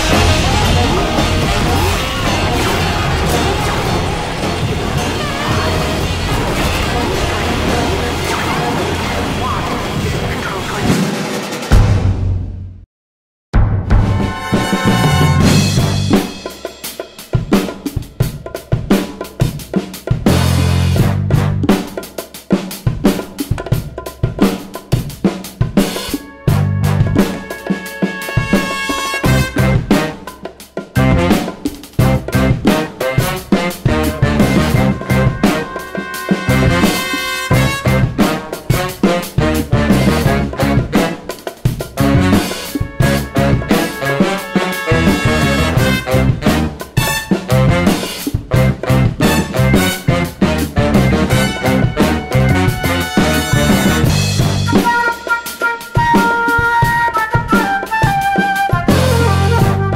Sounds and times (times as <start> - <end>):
Music: 0.0 - 12.9, 13.6 - 59.9.